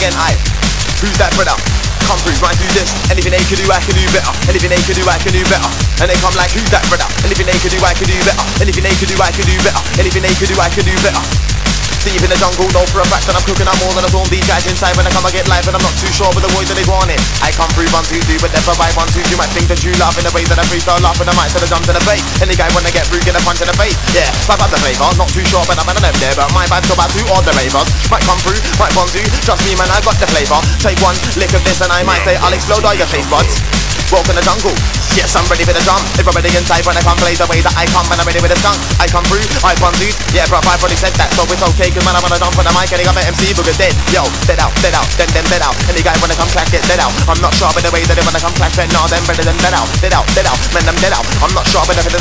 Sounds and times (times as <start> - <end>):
Drum: 0.0 - 52.2.